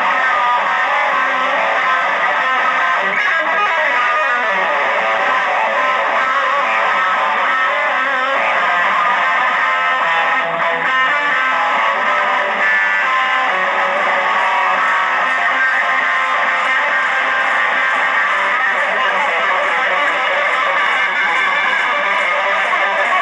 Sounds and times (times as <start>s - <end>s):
Electric guitar: 0.0s - 23.2s.